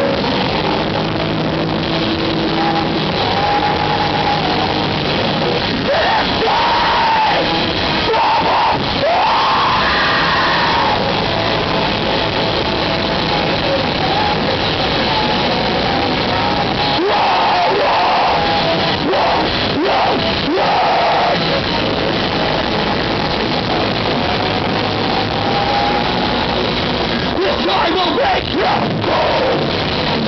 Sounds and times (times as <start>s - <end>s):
Music: 0.0s - 30.2s.